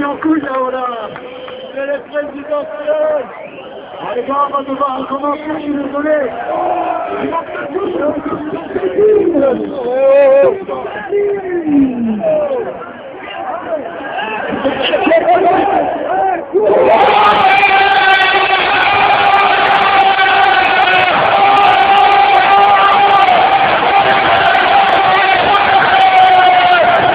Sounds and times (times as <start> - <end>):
Outside, urban or manmade: 0.0 - 27.1
Speech: 7.1 - 13.9.